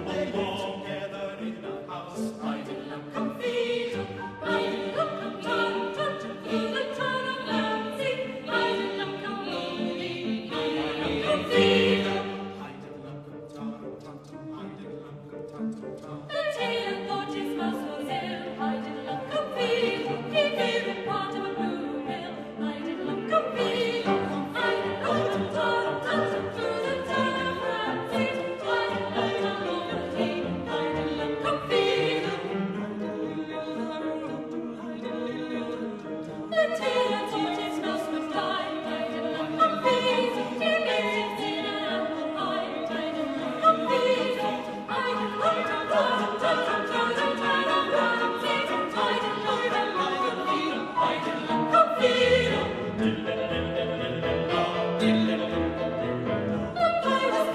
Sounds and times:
Choir: 0:00.0 - 0:57.5
Opera: 0:00.0 - 0:57.5.

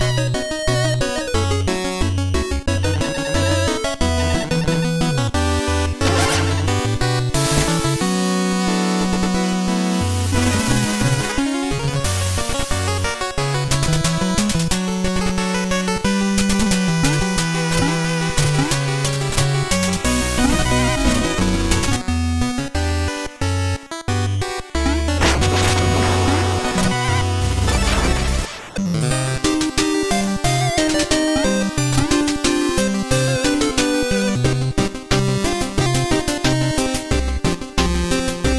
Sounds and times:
Music: 0:00.0 - 0:38.5.

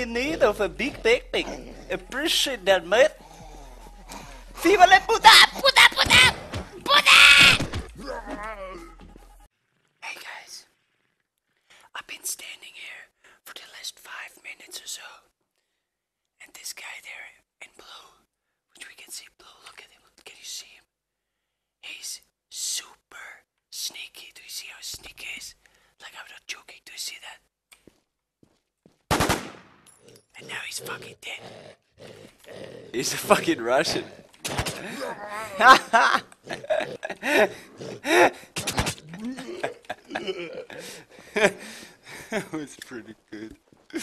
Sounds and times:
Speech: 0:00.0 - 0:03.2, 0:04.6 - 0:07.2, 0:33.0 - 0:34.2
Groan: 0:05.3 - 0:09.1, 0:33.9 - 0:41.0.

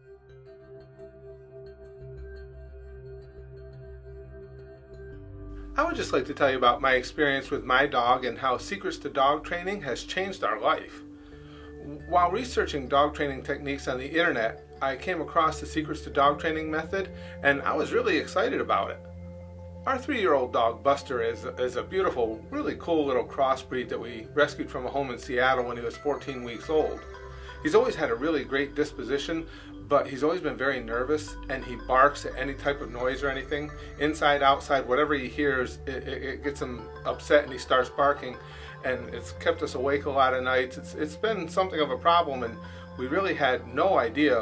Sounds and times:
Speech: 0:05.8 - 0:11.0, 0:11.8 - 0:19.0, 0:19.9 - 0:27.0, 0:27.6 - 0:44.4.

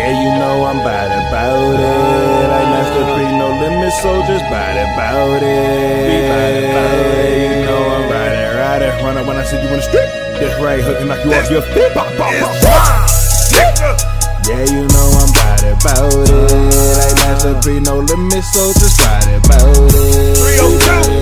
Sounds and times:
Music: 0:00.0 - 0:21.2.

